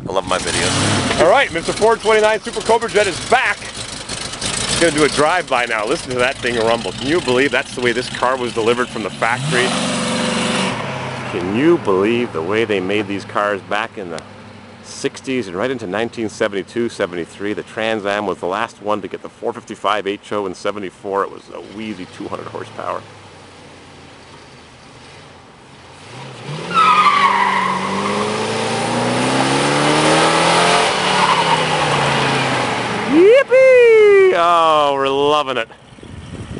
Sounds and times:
Speech: 0.0s - 3.7s, 4.8s - 9.7s, 11.3s - 14.2s, 14.9s - 23.0s, 33.1s - 35.8s
Car: 0.0s - 36.5s
Medium engine (mid frequency): 0.0s - 36.5s
Accelerating, revving, vroom: 0.3s - 1.3s, 9.0s - 11.5s, 26.0s - 33.2s.

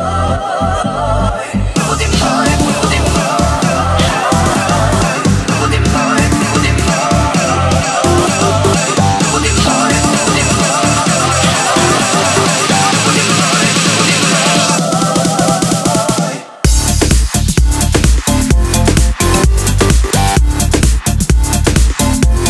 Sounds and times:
Music: 0.0s - 22.5s.

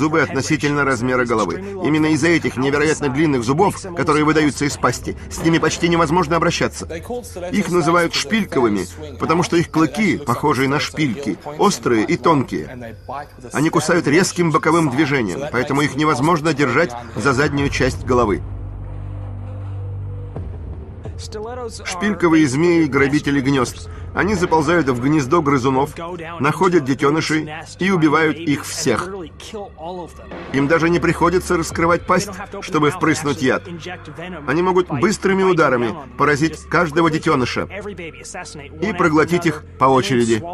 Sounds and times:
Speech: 0.0s - 18.4s, 21.2s - 40.5s
Music: 0.0s - 40.5s.

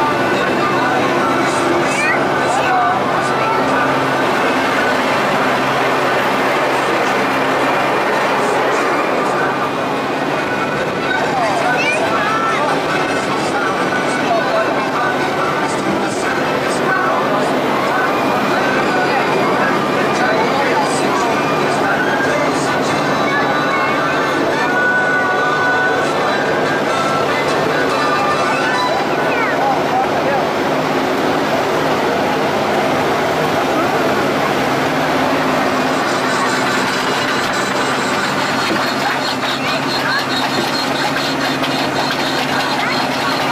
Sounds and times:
Speech: 0.0s - 43.5s
Vehicle: 0.0s - 43.5s.

